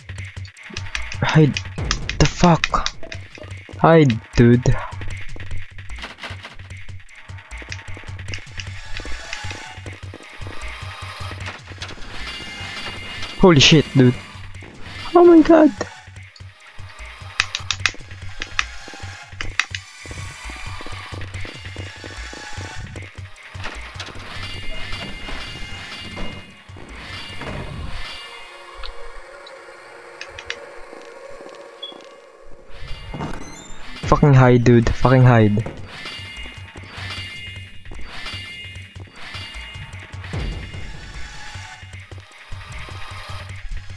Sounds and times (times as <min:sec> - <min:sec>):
Speech: 0:03.8 - 0:04.9, 0:13.4 - 0:14.2, 0:15.1 - 0:15.9, 0:34.1 - 0:35.7.